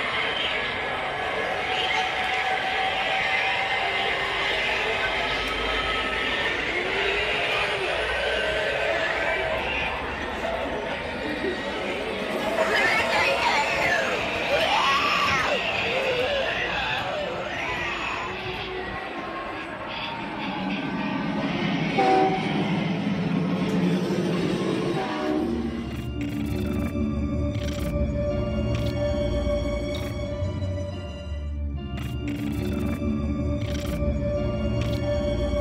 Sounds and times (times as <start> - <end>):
Inside, public space: 0.0 - 25.0
Music: 12.4 - 23.9, 24.6 - 35.6
Train whistle: 21.9 - 22.7, 24.8 - 25.8.